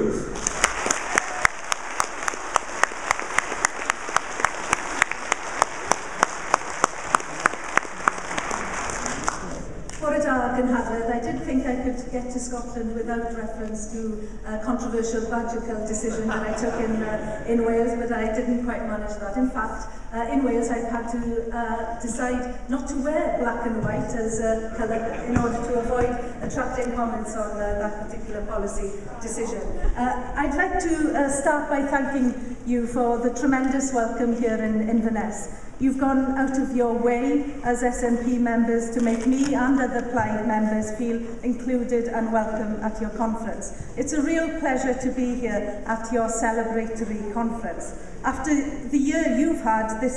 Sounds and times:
Narration, monologue: 0:09.4 - 0:50.1
Female speech, woman speaking: 0:10.0 - 0:50.1.

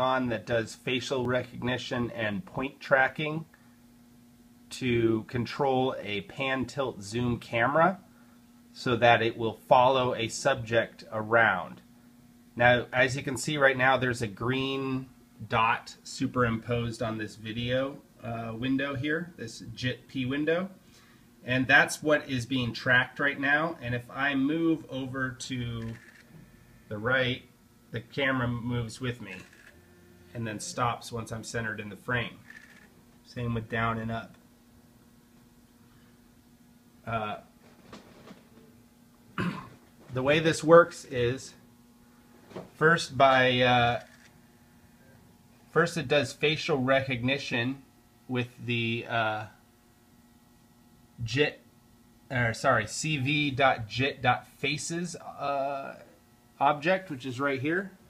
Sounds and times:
Speech: 0:00.0 - 0:03.5, 0:04.7 - 0:08.0, 0:08.8 - 0:11.8, 0:12.6 - 0:20.8, 0:21.4 - 0:26.0, 0:26.9 - 0:29.5, 0:30.3 - 0:32.4, 0:33.3 - 0:34.4, 0:37.0 - 0:37.5, 0:40.1 - 0:41.6, 0:42.8 - 0:44.1, 0:45.7 - 0:49.6, 0:51.2 - 0:51.6, 0:52.3 - 0:58.0.

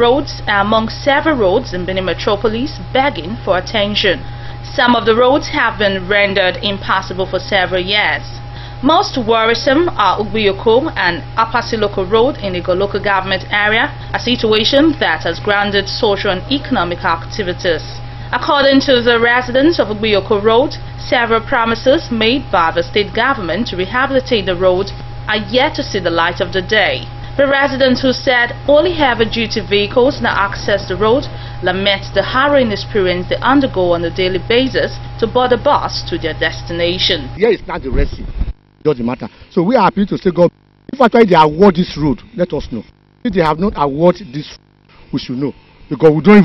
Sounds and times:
Speech: 0:00.0 - 0:38.3, 0:38.9 - 0:44.6, 0:45.2 - 0:46.4.

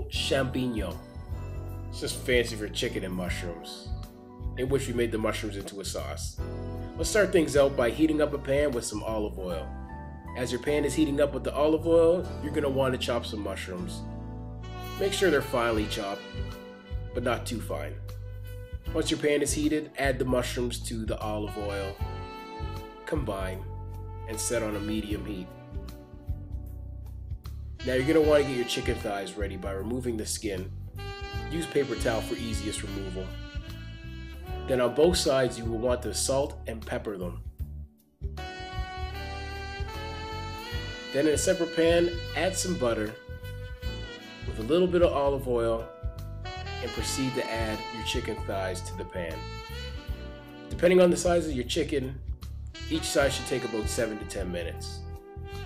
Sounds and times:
Speech: 0:00.0 - 0:01.0, 0:02.0 - 0:03.9, 0:04.6 - 0:06.4, 0:07.0 - 0:09.7, 0:10.4 - 0:14.0, 0:15.0 - 0:16.3, 0:17.2 - 0:18.0, 0:18.9 - 0:22.0, 0:23.1 - 0:23.7, 0:24.3 - 0:25.5, 0:27.8 - 0:30.7, 0:31.5 - 0:33.3, 0:34.6 - 0:37.5, 0:41.1 - 0:43.2, 0:44.5 - 0:45.9, 0:46.8 - 0:49.5, 0:50.8 - 0:52.2, 0:52.9 - 0:55.0
Music: 0:00.0 - 0:55.6.

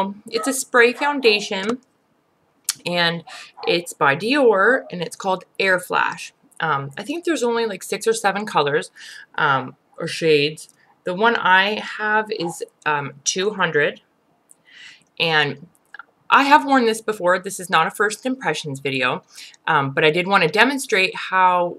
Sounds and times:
Speech: 0:00.0 - 0:01.8, 0:02.7 - 0:14.0, 0:15.2 - 0:15.7, 0:16.3 - 0:21.7.

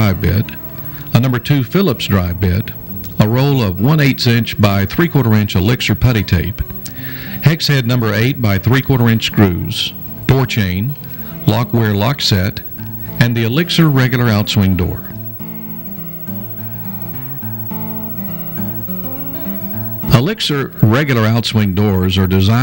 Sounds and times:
Speech: 0:00.0 - 0:06.6, 0:07.4 - 0:15.2, 0:20.1 - 0:22.6
Music: 0:00.0 - 0:22.6.

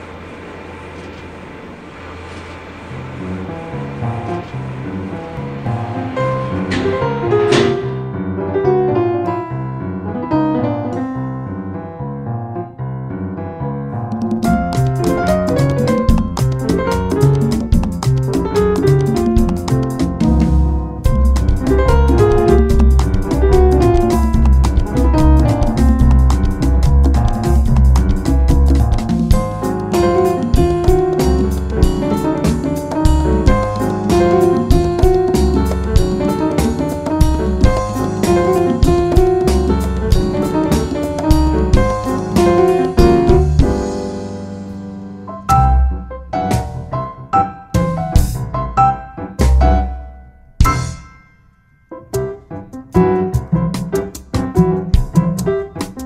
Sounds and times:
Happy music: 0:14.1 - 0:56.0.

